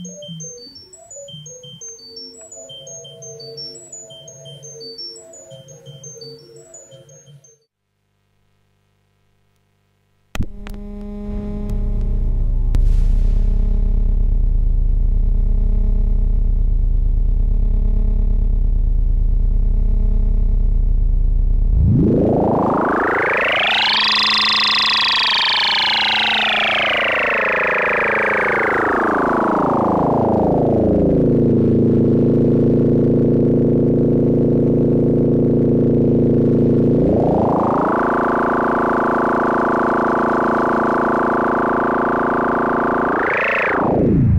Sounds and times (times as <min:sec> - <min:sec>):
Synthesizer: 0:00.0 - 0:07.7, 0:21.7 - 0:31.5, 0:36.0 - 0:44.3.